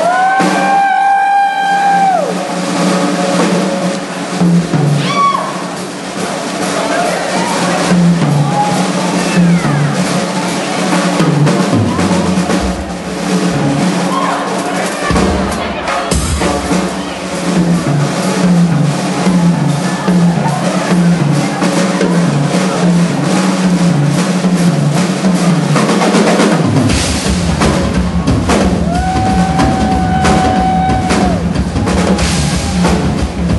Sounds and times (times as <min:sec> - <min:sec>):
Drum: 0:00.0 - 0:33.5
Drum kit: 0:00.0 - 0:33.5.